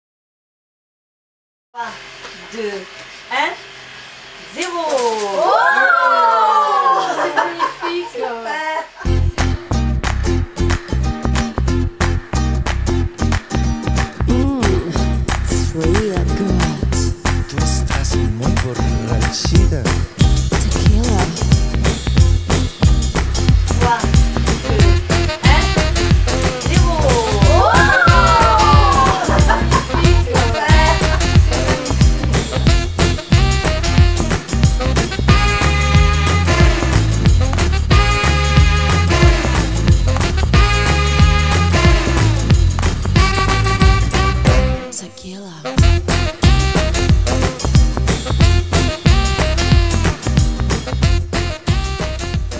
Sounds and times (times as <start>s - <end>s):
Music: 9.0s - 52.6s.